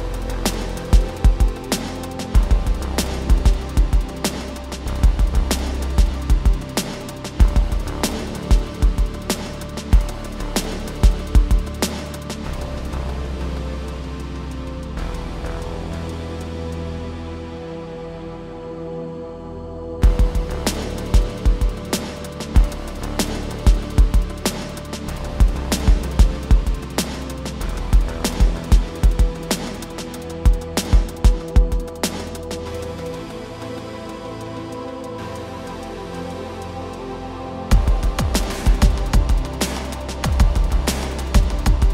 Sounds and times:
Music: 0.0 - 41.9.

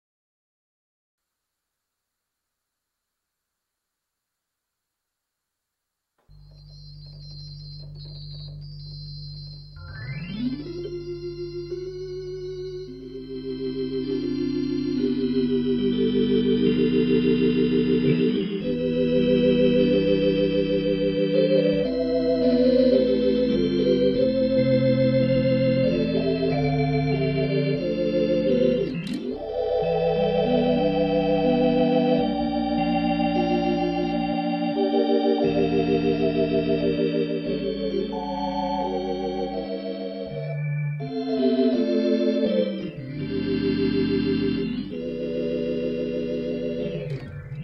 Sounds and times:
Music: 6.2 - 47.6
Harmonic: 6.3 - 47.6.

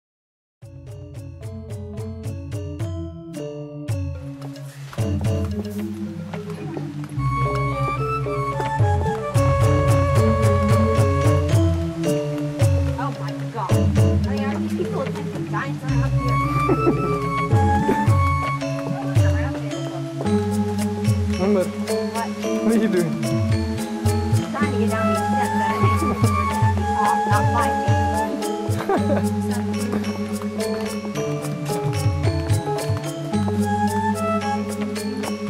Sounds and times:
Music: 0.6 - 35.4.

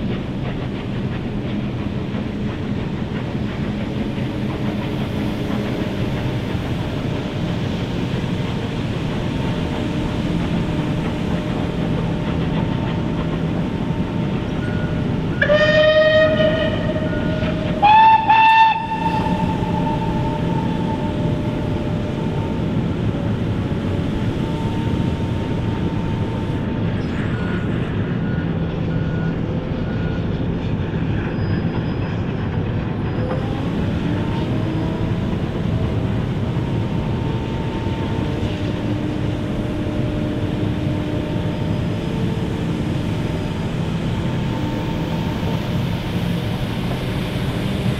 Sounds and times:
Train whistle: 15.3 - 21.7.

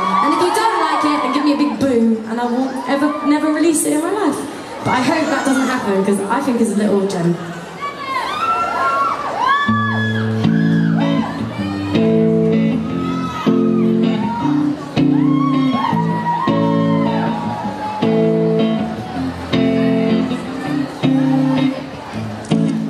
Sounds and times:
Music: 9.7 - 22.9.

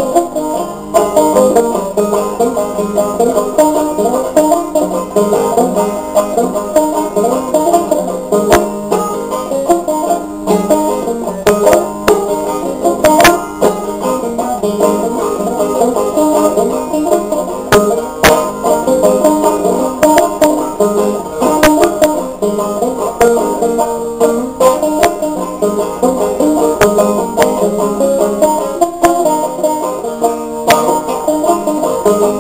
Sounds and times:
Banjo: 0.0 - 32.4.

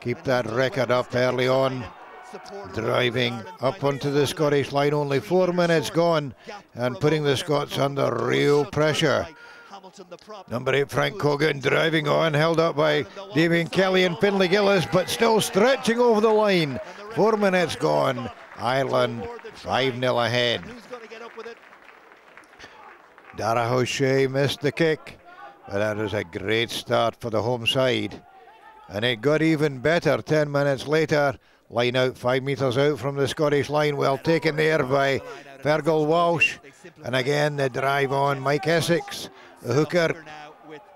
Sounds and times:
Speech: 0.0 - 21.4, 23.4 - 28.2, 28.9 - 40.9.

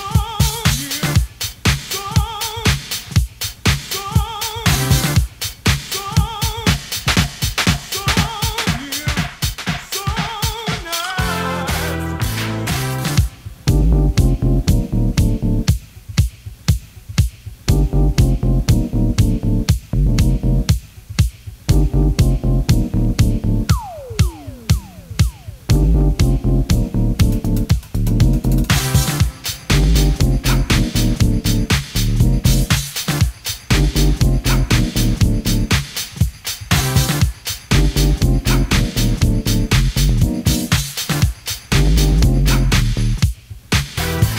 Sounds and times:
Disco: 0.0 - 44.3.

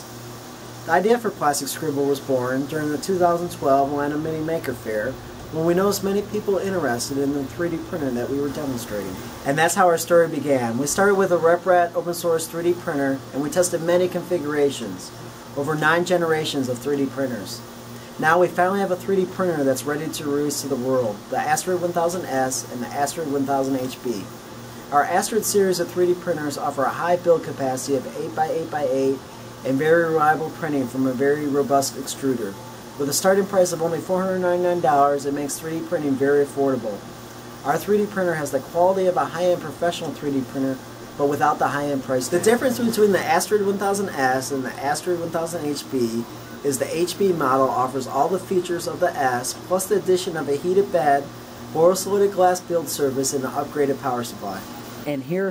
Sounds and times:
Speech: 0.8 - 55.5.

